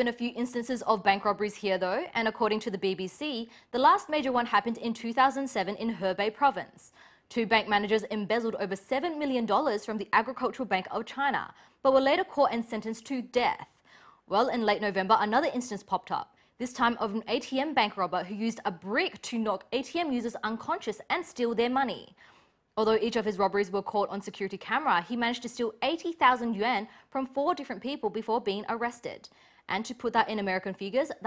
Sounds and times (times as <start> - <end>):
Speech: 0.0 - 13.7, 14.3 - 22.2, 22.8 - 31.2.